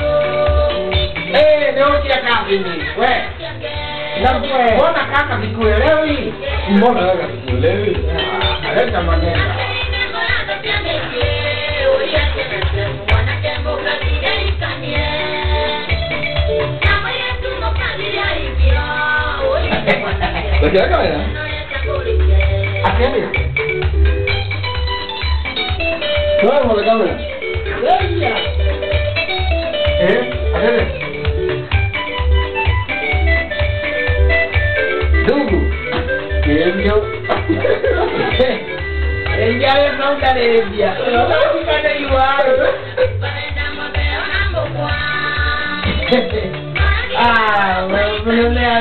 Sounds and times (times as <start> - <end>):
Music: 0.0 - 48.8.